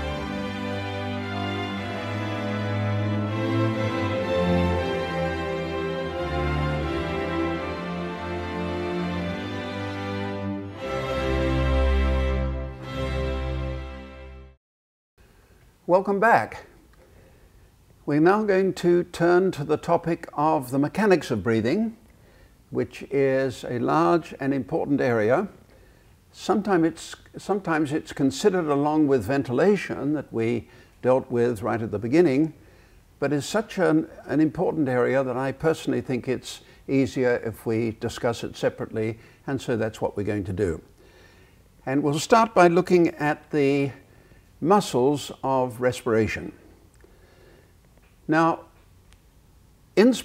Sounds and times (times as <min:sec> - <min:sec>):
Speech: 0:15.9 - 0:16.8, 0:18.1 - 0:22.0, 0:22.8 - 0:25.6, 0:26.4 - 0:32.6, 0:33.2 - 0:40.9, 0:41.9 - 0:44.0, 0:44.6 - 0:46.6, 0:48.3 - 0:48.8, 0:50.0 - 0:50.2.